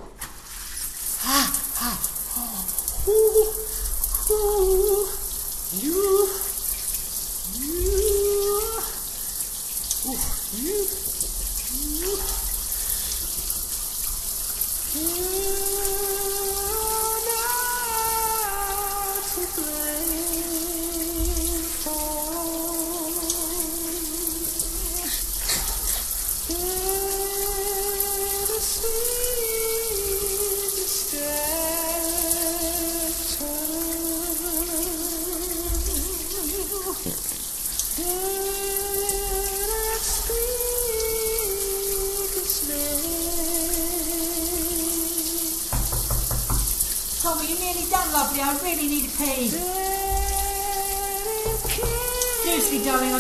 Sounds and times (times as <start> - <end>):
Water tap, faucet: 0.0 - 53.2.